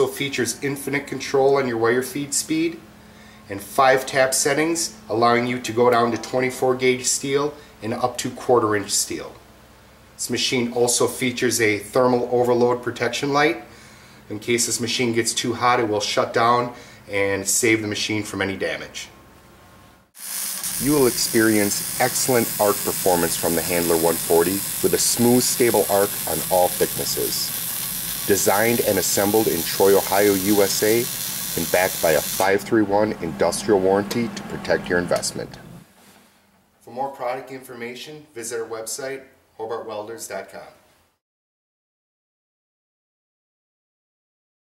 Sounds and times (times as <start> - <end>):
Speech: 0.0 - 2.8, 3.5 - 9.4, 10.2 - 13.7, 14.3 - 19.2, 20.8 - 27.5, 28.3 - 35.6, 36.8 - 40.8.